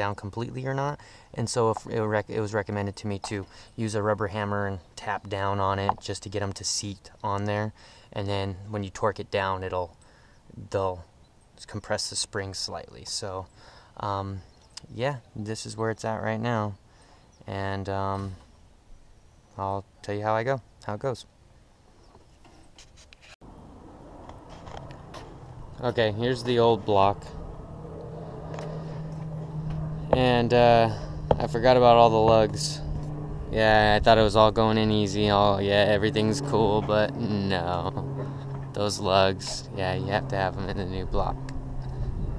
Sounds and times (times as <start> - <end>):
Speech: 0.0 - 16.8, 17.5 - 18.4, 19.6 - 21.3, 25.8 - 27.4, 30.2 - 32.9, 33.5 - 38.0, 38.7 - 41.4.